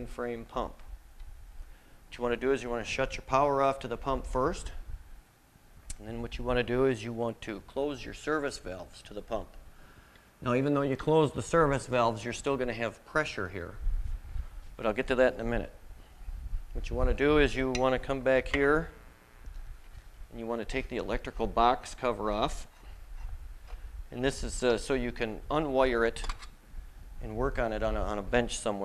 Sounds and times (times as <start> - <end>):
Speech: 0.0 - 0.8, 2.1 - 4.8, 5.9 - 9.6, 10.4 - 13.8, 14.8 - 15.8, 16.8 - 19.0, 20.3 - 22.7, 24.1 - 26.3, 27.2 - 28.8.